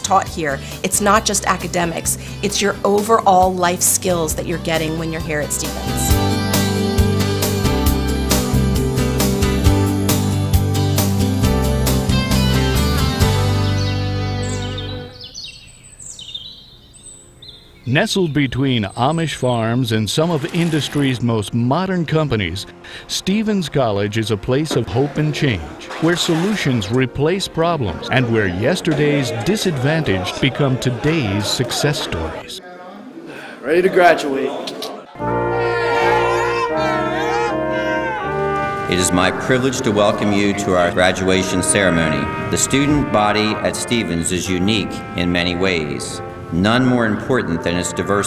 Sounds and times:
Speech: 0:00.0 - 0:06.0, 0:17.9 - 0:35.1, 0:38.9 - 0:48.2
Music: 0:00.0 - 0:15.3, 0:18.8 - 0:32.5, 0:35.2 - 0:48.2
Bird vocalization, bird call, bird song: 0:13.8 - 0:19.4.

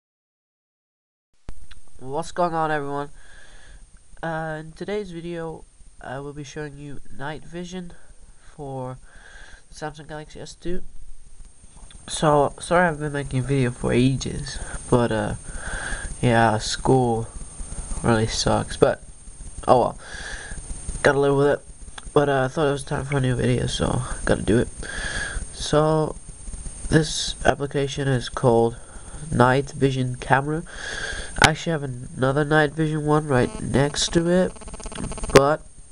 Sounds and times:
Speech: 0:02.0 - 0:03.2, 0:04.2 - 0:09.0, 0:09.7 - 0:10.9, 0:12.0 - 0:15.4, 0:16.2 - 0:17.3, 0:18.0 - 0:20.0, 0:21.0 - 0:24.8, 0:25.5 - 0:26.2, 0:26.9 - 0:30.7, 0:31.4 - 0:34.6, 0:35.3 - 0:35.7.

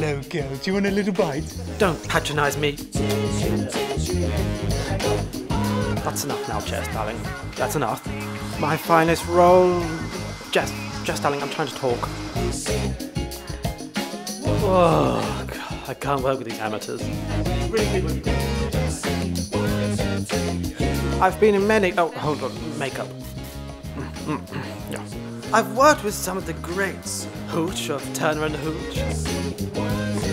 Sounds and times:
Speech: 0:00.0 - 0:02.8, 0:06.0 - 0:08.0, 0:08.6 - 0:10.0, 0:10.6 - 0:12.1, 0:14.5 - 0:17.1, 0:17.7 - 0:18.2, 0:21.2 - 0:23.1, 0:24.2 - 0:29.1
Music: 0:00.0 - 0:30.3.

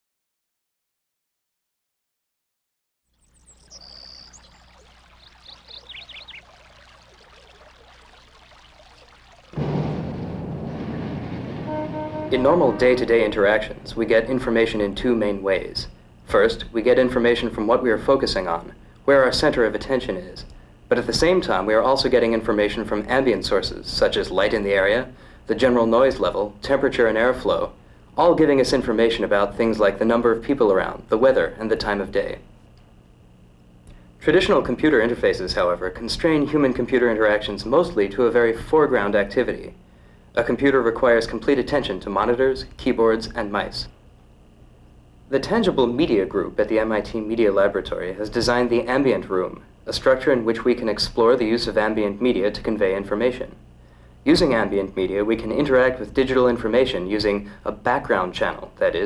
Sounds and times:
Pour: 0:03.8 - 0:09.6.

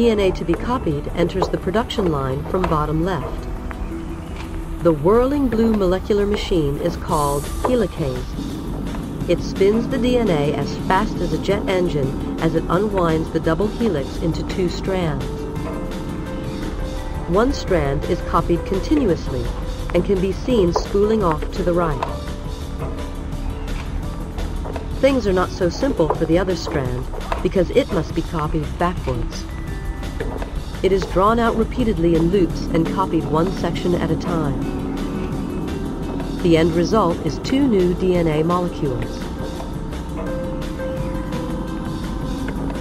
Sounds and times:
Speech: 0:00.0 - 0:03.4, 0:04.8 - 0:08.4, 0:09.3 - 0:15.3, 0:17.3 - 0:22.1, 0:25.0 - 0:29.4, 0:30.8 - 0:34.7, 0:36.4 - 0:39.3
Music: 0:00.0 - 0:42.8.

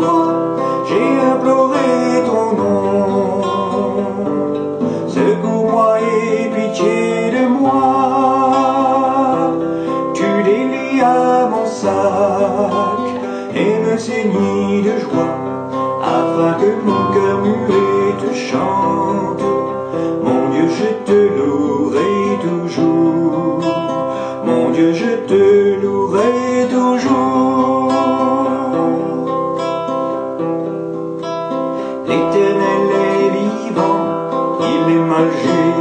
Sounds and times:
Music: 0:00.0 - 0:35.8.

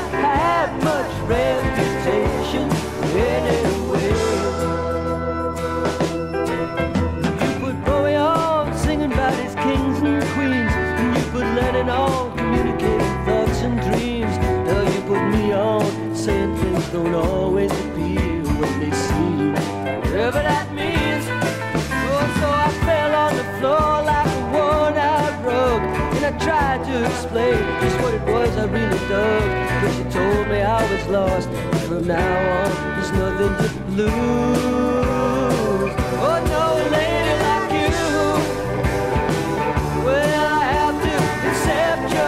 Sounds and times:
Country: 0:00.0 - 0:42.2.

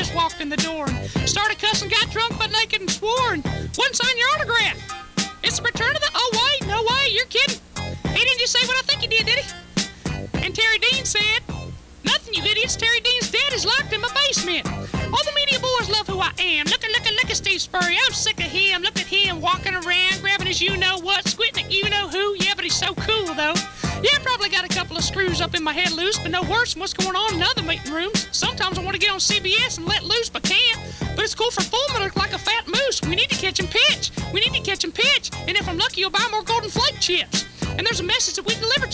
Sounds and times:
Speech: 0:00.0 - 0:04.8, 0:05.4 - 0:09.5, 0:10.4 - 0:38.9
Music: 0:00.0 - 0:38.9.

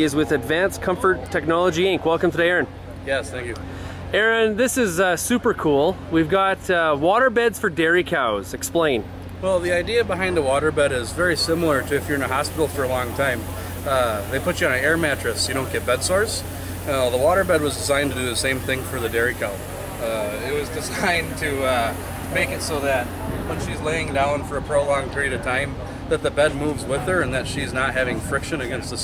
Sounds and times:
Speech: 0:04.2 - 0:29.0.

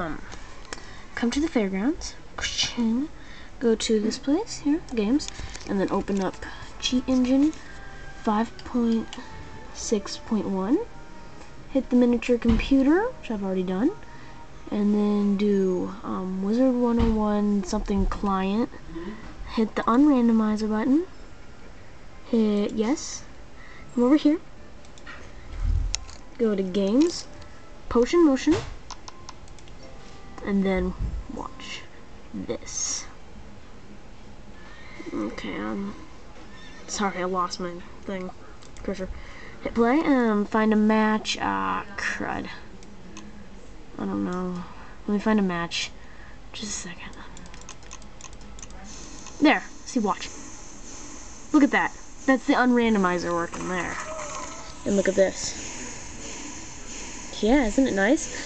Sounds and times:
Music: 0:00.0 - 0:39.7.

